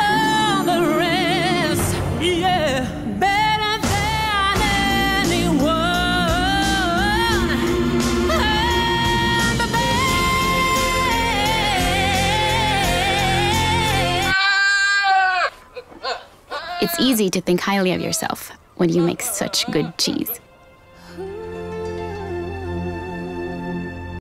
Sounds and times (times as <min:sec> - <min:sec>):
Music: 0:00.0 - 0:14.4, 0:20.0 - 0:24.2
Speech: 0:16.8 - 0:20.4.